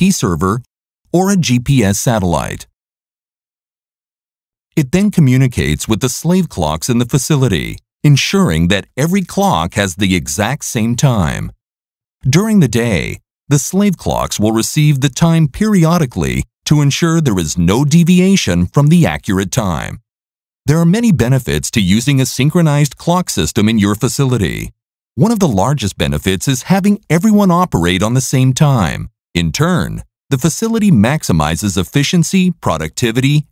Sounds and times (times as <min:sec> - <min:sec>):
Speech: 0:00.0 - 0:02.7, 0:04.8 - 0:11.6, 0:12.2 - 0:20.0, 0:20.7 - 0:33.5.